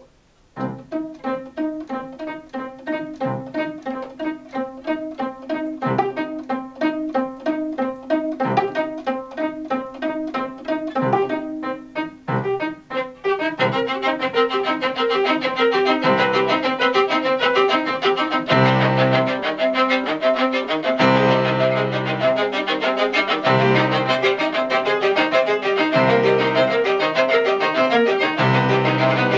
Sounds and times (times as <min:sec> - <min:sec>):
Violin, fiddle: 0:00.6 - 0:29.3.